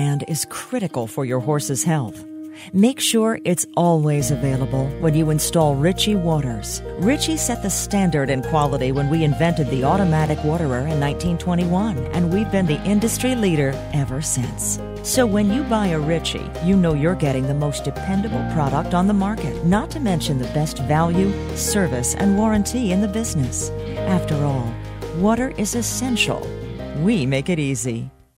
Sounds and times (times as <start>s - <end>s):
Speech: 0.0s - 28.1s
Music: 0.0s - 28.3s.